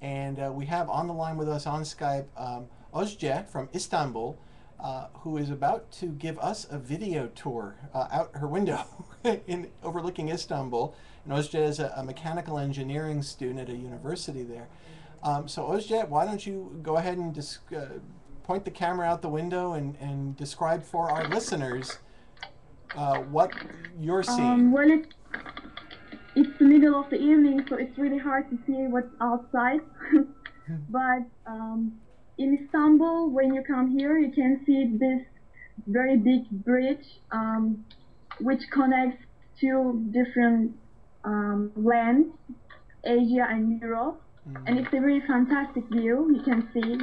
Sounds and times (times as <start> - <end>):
Speech: 0.0 - 22.0, 22.9 - 25.1, 26.3 - 35.2, 43.1 - 47.0.